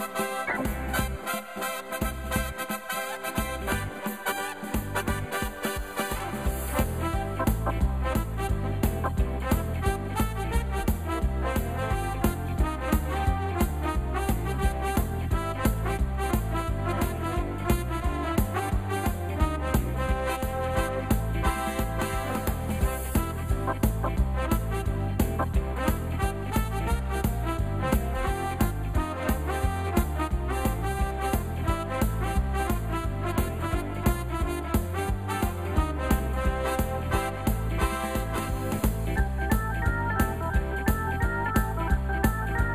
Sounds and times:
Music: 0.0 - 42.7.

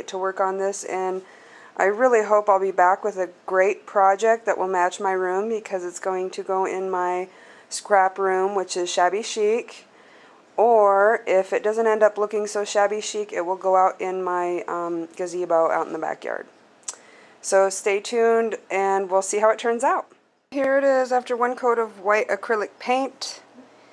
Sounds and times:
Speech: 0.0 - 1.2, 1.8 - 9.9, 10.6 - 16.5, 17.4 - 23.5.

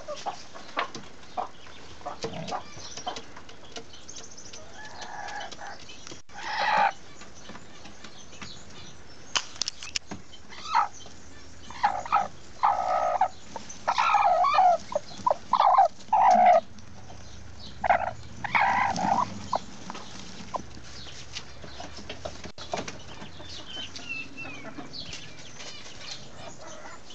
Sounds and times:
Bird: 0.0 - 27.1.

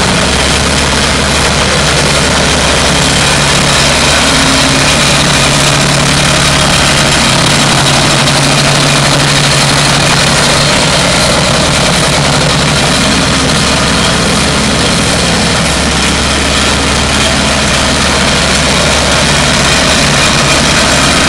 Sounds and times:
Engine: 0.0 - 21.2.

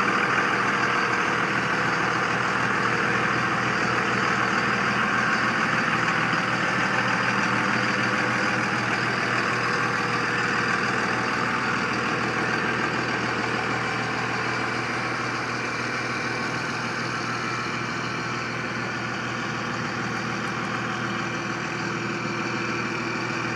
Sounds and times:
Vehicle: 0.0 - 23.5.

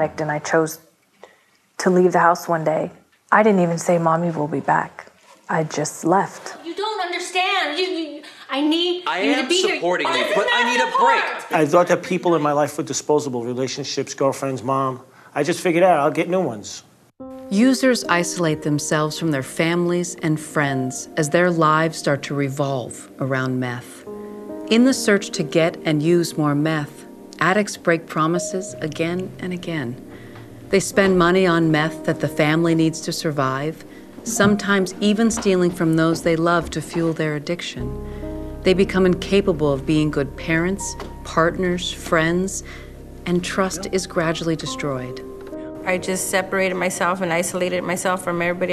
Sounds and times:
Music: 6.6 - 12.9, 17.2 - 48.7
Speech: 9.1 - 16.9, 43.3 - 44.9.

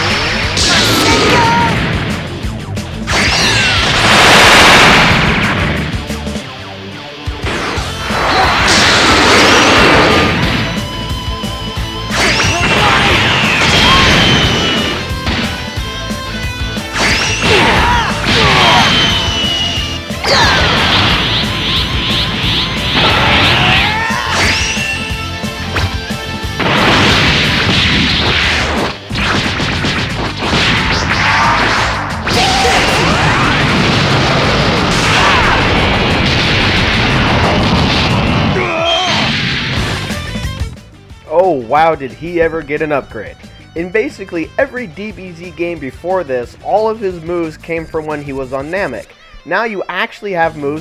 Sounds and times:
Music: 0.0 - 50.8.

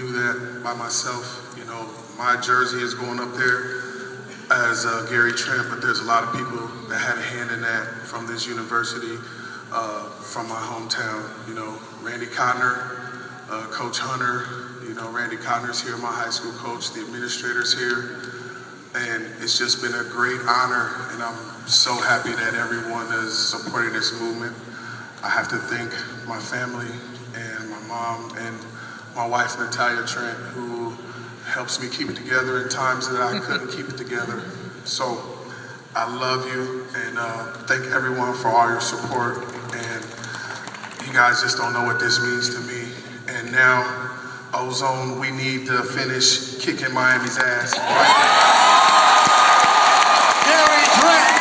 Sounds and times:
Male speech, man speaking: 0.0 - 18.3, 18.9 - 35.4, 36.0 - 40.2, 41.0 - 47.8, 50.4 - 51.4
Narration, monologue: 0.0 - 48.0.

